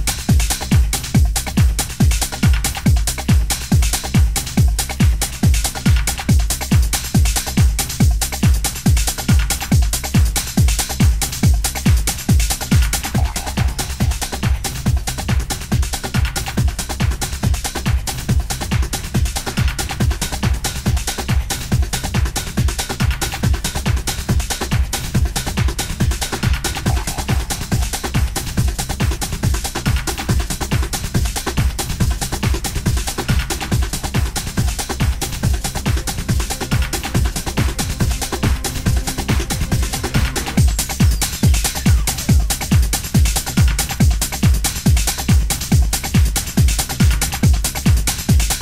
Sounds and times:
Techno: 0.0 - 48.6.

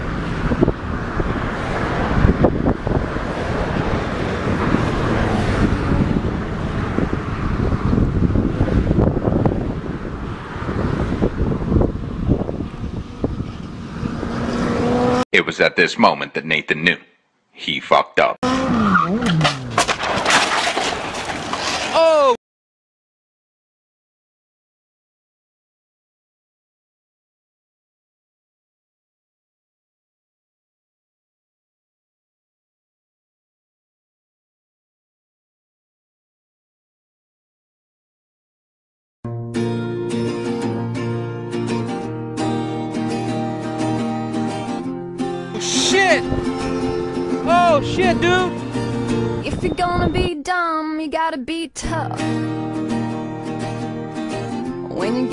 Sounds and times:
Motorcycle: 0.0 - 15.3, 18.4 - 22.3, 40.1 - 49.5
Wind: 0.0 - 22.4, 39.3 - 55.3.

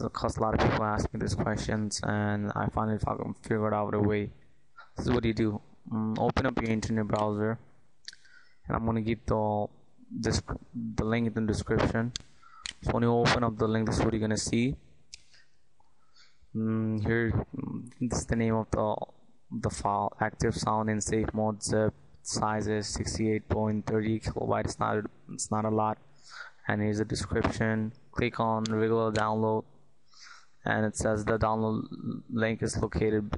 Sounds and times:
Speech: 0.0 - 14.8, 16.5 - 29.7, 30.6 - 33.3.

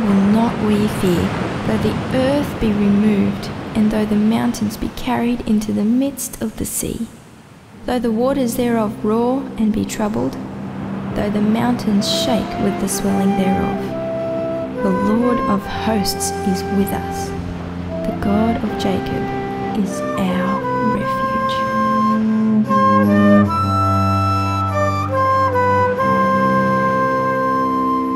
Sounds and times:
Music: 0.0 - 6.0, 7.8 - 28.1
Speech: 0.0 - 7.1, 7.8 - 10.4, 11.2 - 13.9, 14.8 - 17.3, 18.0 - 21.7.

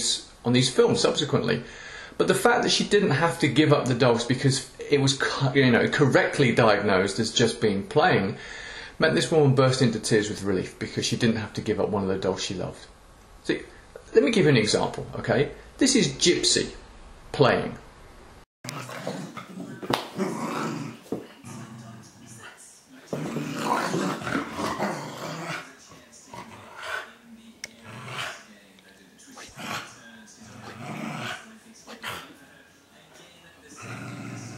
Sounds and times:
Speech: 0.0 - 8.4, 9.0 - 17.8, 21.1 - 34.5.

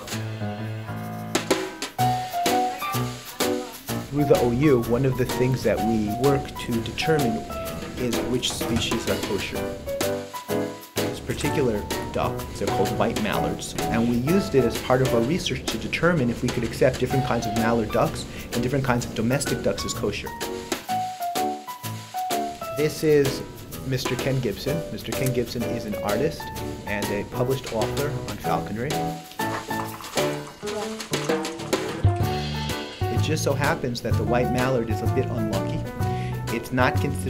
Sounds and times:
Music: 0.0 - 37.2
Speech: 2.6 - 9.6, 11.2 - 20.4, 22.8 - 29.0, 33.1 - 35.9, 36.5 - 37.2.

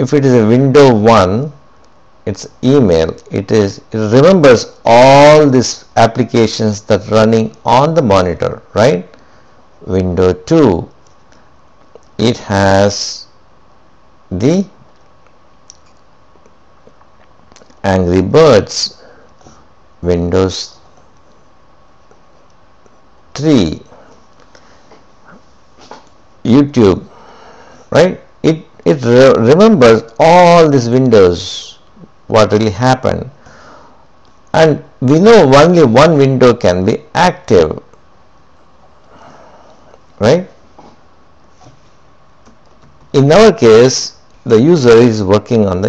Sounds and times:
Speech: 0.0 - 1.6, 2.3 - 9.2, 9.8 - 11.0, 12.2 - 13.4, 14.3 - 14.8, 17.6 - 19.0, 20.0 - 20.8, 23.4 - 24.0, 26.4 - 27.1, 27.9 - 33.4, 34.5 - 38.0, 40.2 - 40.6, 43.1 - 45.8.

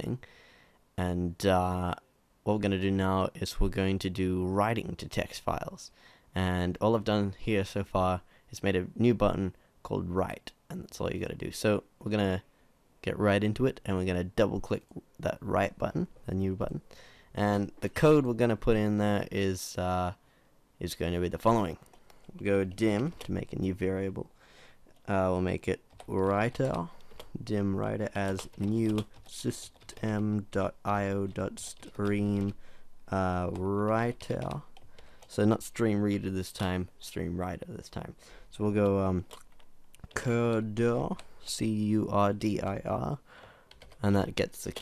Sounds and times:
Speech: 0.0 - 0.2, 1.0 - 20.2, 20.8 - 21.8, 22.4 - 24.3, 25.0 - 34.7, 35.3 - 39.3, 40.1 - 43.2, 44.0 - 44.8.

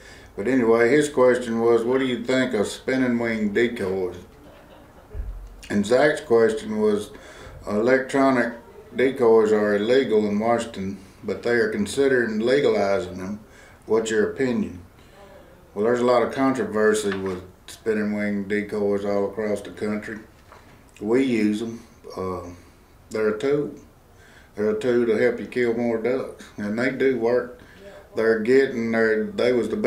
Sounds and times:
Speech: 0.4 - 4.3, 5.6 - 20.3, 21.0 - 23.9, 24.6 - 29.8.

